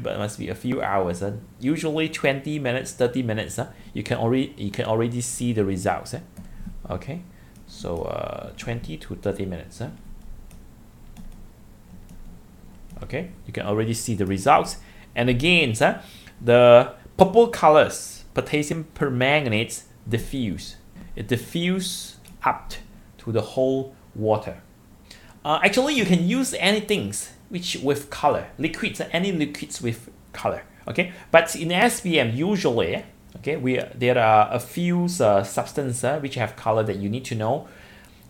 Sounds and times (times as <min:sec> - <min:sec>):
Speech: 0:00.0 - 0:10.0, 0:13.0 - 0:24.7, 0:25.4 - 0:37.7.